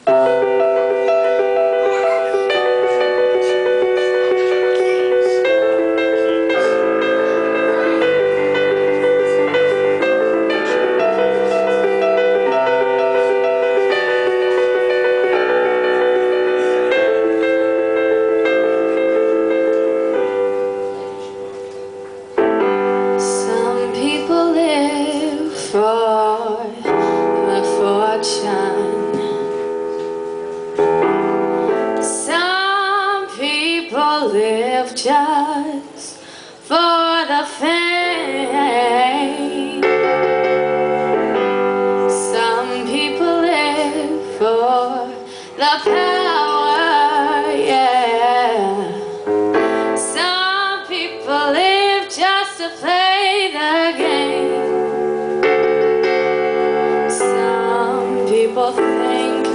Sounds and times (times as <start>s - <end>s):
Music: 0.0s - 59.5s.